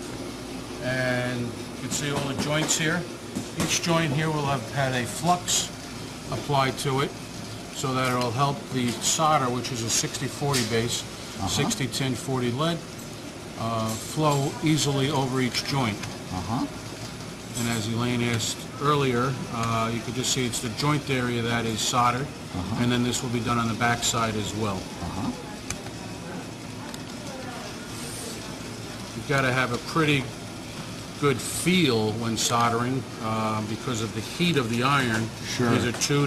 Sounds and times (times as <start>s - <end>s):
Speech: 0.8s - 5.7s, 6.3s - 7.1s, 7.8s - 12.8s, 13.6s - 16.7s, 17.6s - 25.5s, 29.1s - 30.3s, 31.2s - 36.2s.